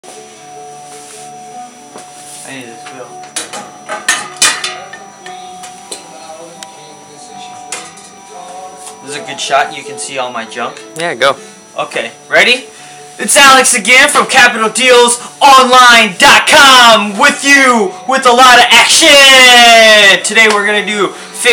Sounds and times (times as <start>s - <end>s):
Inside, public space: 0.0s - 9.4s
Music: 0.0s - 21.5s.